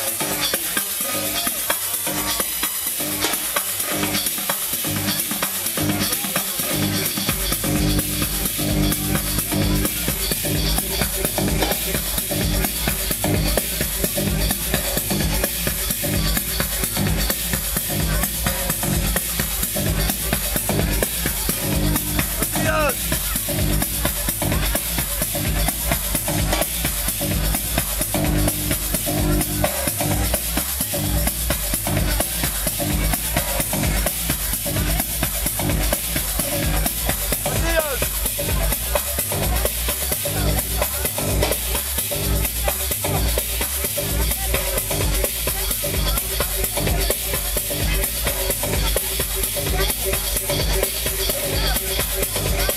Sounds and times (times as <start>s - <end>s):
Music: 0.0s - 52.7s
Speech: 0.0s - 52.7s.